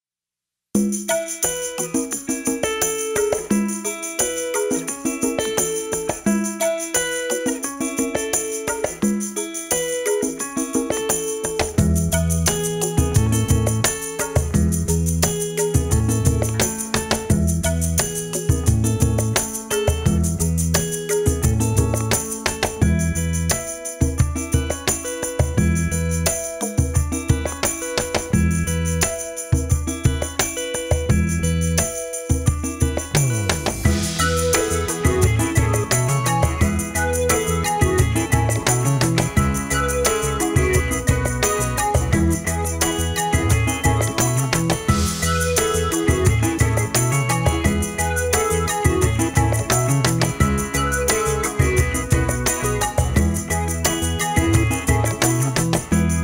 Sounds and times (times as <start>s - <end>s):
Jingle, tinkle: 0.8s - 56.2s
Music: 0.8s - 56.2s.